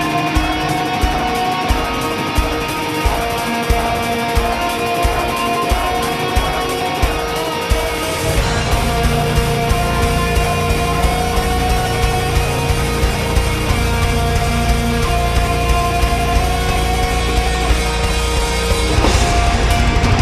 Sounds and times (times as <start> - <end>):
Music: 0.0 - 20.2.